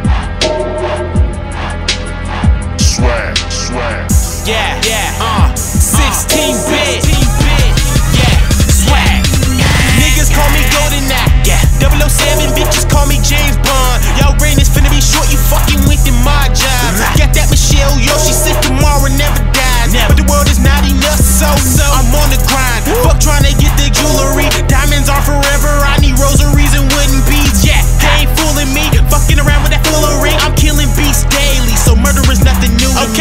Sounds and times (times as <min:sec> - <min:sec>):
Techno: 0:00.0 - 0:33.2.